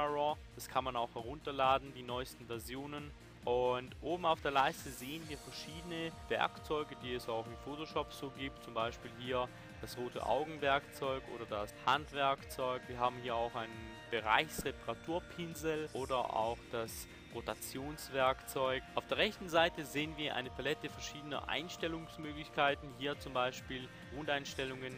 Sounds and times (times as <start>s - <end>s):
Music: 0.0s - 24.9s
Speech: 0.0s - 24.9s.